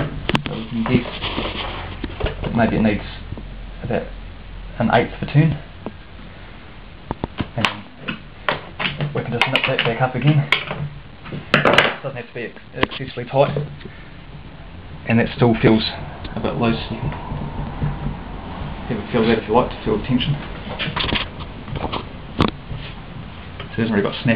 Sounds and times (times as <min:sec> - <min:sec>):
Speech: 0:00.0 - 0:01.1, 0:02.4 - 0:04.1, 0:04.8 - 0:05.6, 0:07.6 - 0:08.0, 0:09.1 - 0:10.5, 0:12.0 - 0:13.6, 0:15.1 - 0:17.1, 0:18.9 - 0:20.4, 0:23.7 - 0:24.3.